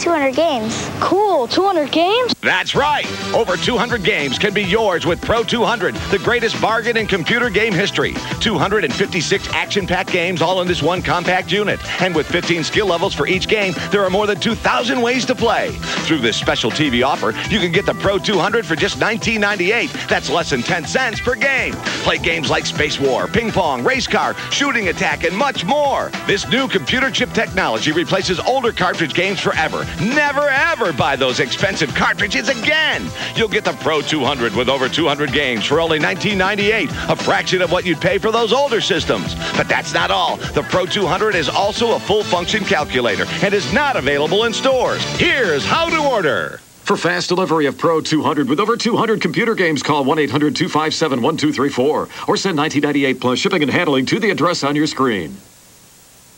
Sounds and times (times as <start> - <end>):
Speech: 0.0 - 55.4.